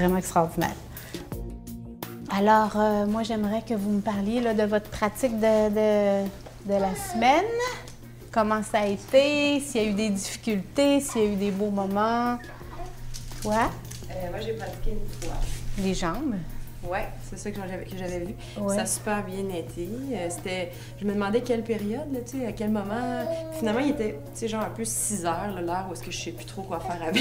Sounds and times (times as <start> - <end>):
Music: 0.0 - 27.2
Speech: 13.4 - 27.2.